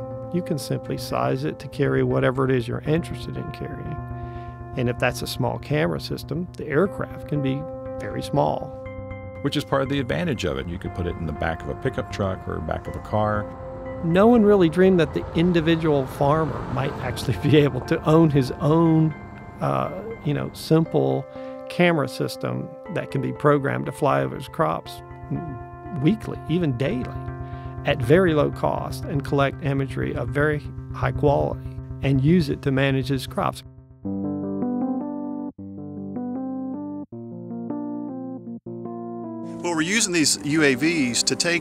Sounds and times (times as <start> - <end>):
Music: 0.0 - 41.6
Speech: 0.4 - 4.0, 4.8 - 8.7, 9.5 - 27.1, 27.9 - 33.6, 39.7 - 41.6.